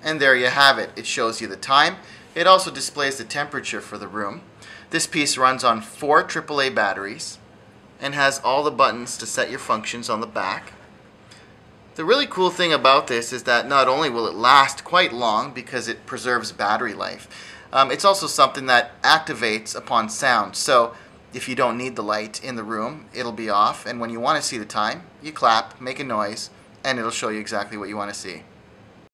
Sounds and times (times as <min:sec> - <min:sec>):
Speech: 0:00.0 - 0:07.4, 0:08.0 - 0:10.8, 0:12.0 - 0:28.5.